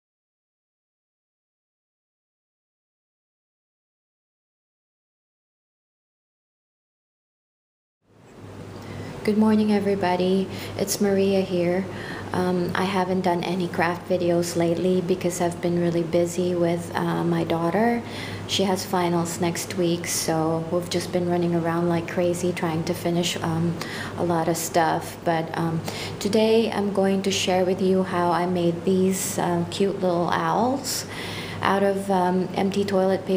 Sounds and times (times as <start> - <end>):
Speech: 9.2 - 33.3.